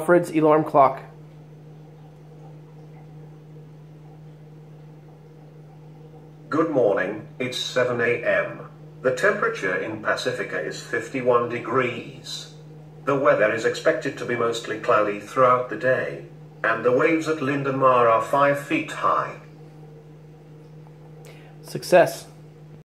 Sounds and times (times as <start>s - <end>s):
Speech: 0.0s - 1.2s, 6.5s - 19.5s, 21.6s - 22.4s.